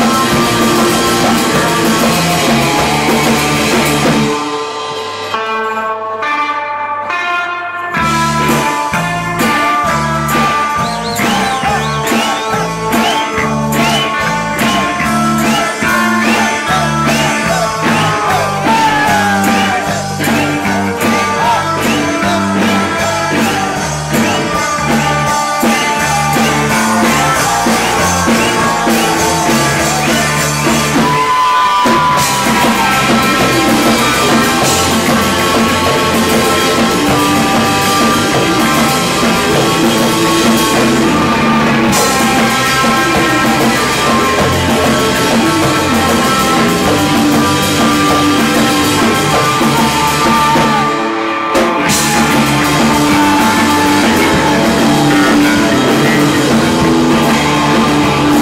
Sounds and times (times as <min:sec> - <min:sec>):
Music: 0:00.0 - 0:58.4.